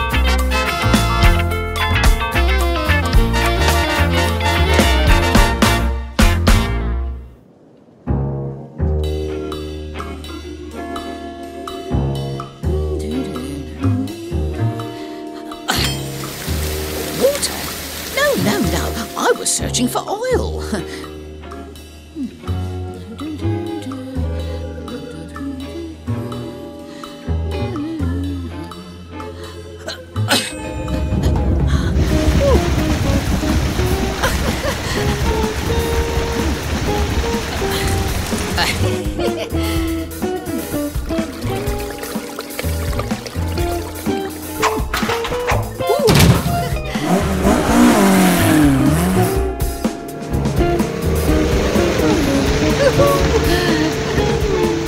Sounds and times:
Music: 0.0 - 7.4, 8.1 - 54.8.

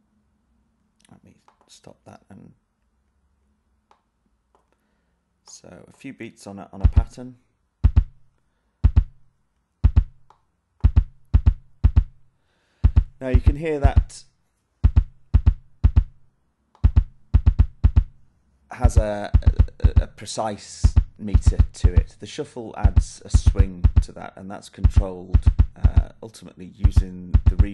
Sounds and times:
Speech: 1.0 - 2.6, 5.5 - 7.5, 13.2 - 14.3, 18.7 - 27.7
Drum machine: 6.8 - 7.2, 7.8 - 8.3, 8.9 - 12.3, 12.9 - 14.2, 14.8 - 16.2, 16.8 - 18.2, 18.8 - 22.2, 22.8 - 26.2, 26.8 - 27.7.

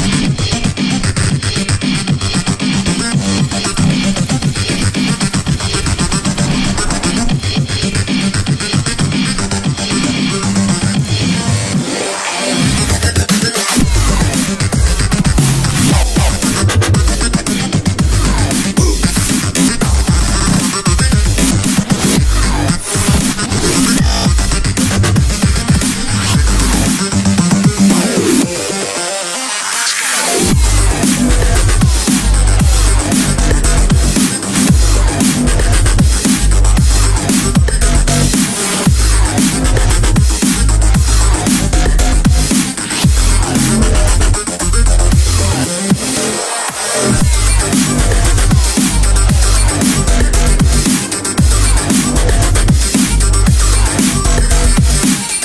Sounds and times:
Dubstep: 0.0 - 55.4.

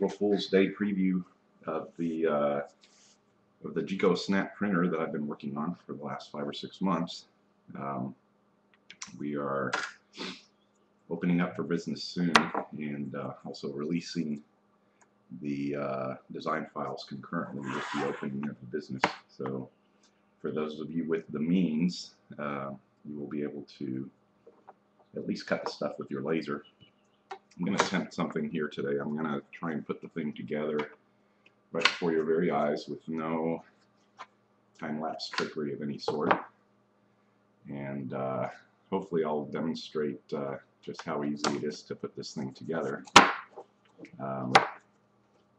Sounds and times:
Speech: 0.0 - 2.7, 3.7 - 8.1, 8.9 - 10.4, 11.1 - 14.4, 15.4 - 19.7, 20.5 - 24.1, 25.2 - 26.6, 27.6 - 30.9, 31.8 - 33.6, 34.8 - 36.4, 37.7 - 43.2, 44.0 - 44.6.

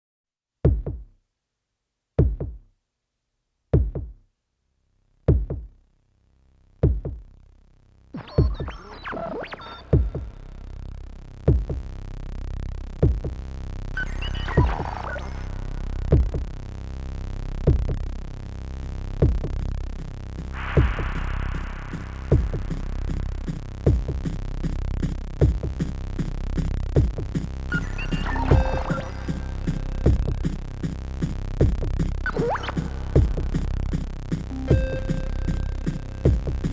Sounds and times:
Drum machine: 0.7 - 1.1, 2.2 - 2.7, 3.8 - 4.2, 5.3 - 5.8, 6.8 - 7.3, 8.2 - 9.1, 9.8 - 10.7, 11.5 - 12.0, 13.0 - 16.6, 17.7 - 18.2, 19.2 - 36.7.

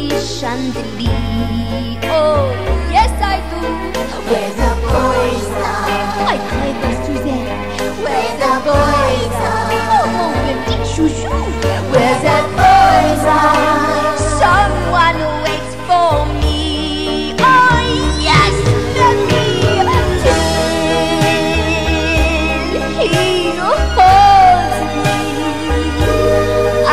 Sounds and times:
Music: 0.0 - 26.9.

